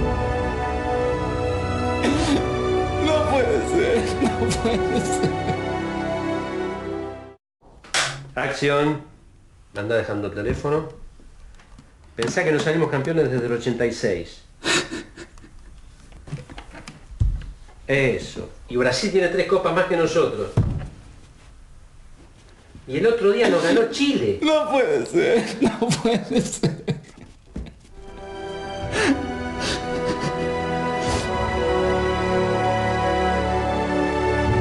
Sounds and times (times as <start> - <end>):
Music: 0.0 - 7.4, 28.0 - 34.6
Speech: 9.8 - 11.0, 17.9 - 20.6, 22.9 - 25.6.